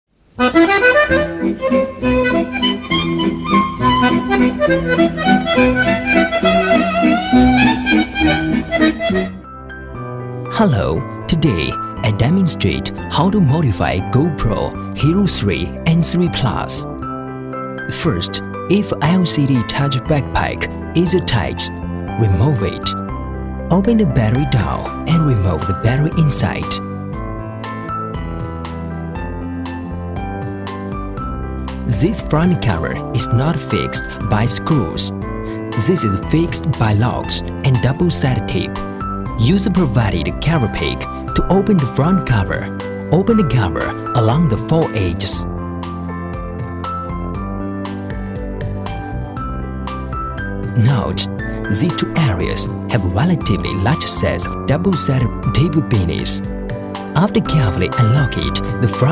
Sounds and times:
Accordion: 0:00.4 - 0:09.4.

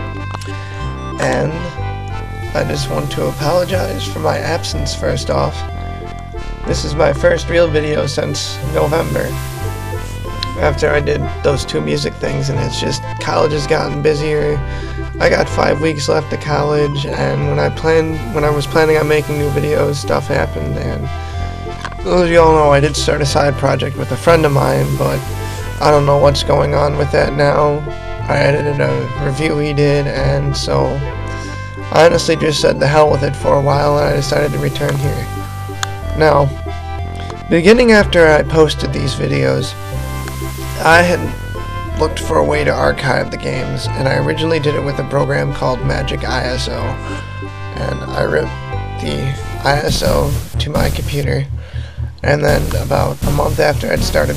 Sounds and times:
Music: 0:00.0 - 0:54.3
Speech: 0:01.2 - 0:01.8, 0:02.5 - 0:05.7, 0:06.7 - 0:09.4, 0:10.4 - 0:21.2, 0:21.8 - 0:31.1, 0:31.9 - 0:35.3, 0:36.1 - 0:36.6, 0:37.4 - 0:39.8, 0:40.8 - 0:41.4, 0:42.0 - 0:47.2, 0:47.8 - 0:51.6, 0:52.2 - 0:54.3.

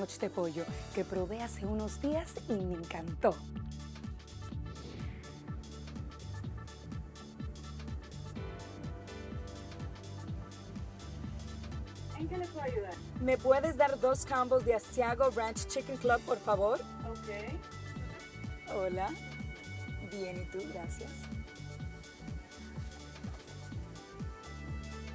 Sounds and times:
Speech: 0:00.0 - 0:03.4, 0:12.1 - 0:17.6, 0:18.7 - 0:19.2, 0:20.0 - 0:21.2
Music: 0:00.0 - 0:25.1.

